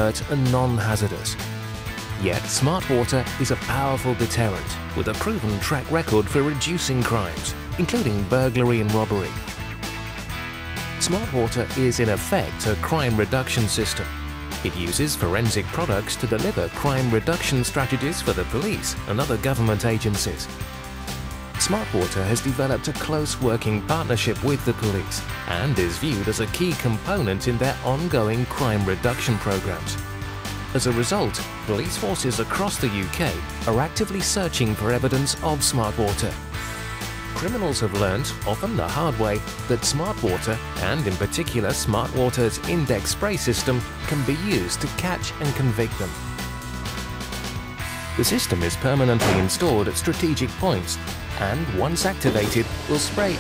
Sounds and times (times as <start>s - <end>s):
Speech: 0.0s - 1.4s, 2.2s - 9.4s, 11.0s - 20.5s, 21.6s - 30.0s, 30.7s - 36.4s, 37.4s - 46.2s, 48.2s - 53.4s
Music: 0.0s - 53.4s.